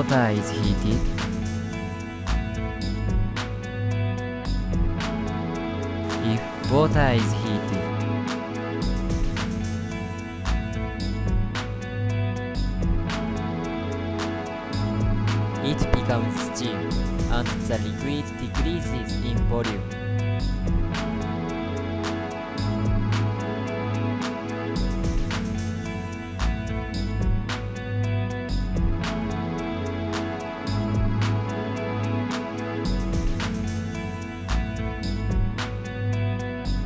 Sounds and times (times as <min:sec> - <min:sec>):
Speech: 0:00.0 - 0:01.1, 0:06.2 - 0:07.9, 0:15.6 - 0:19.9
Music: 0:00.0 - 0:36.8.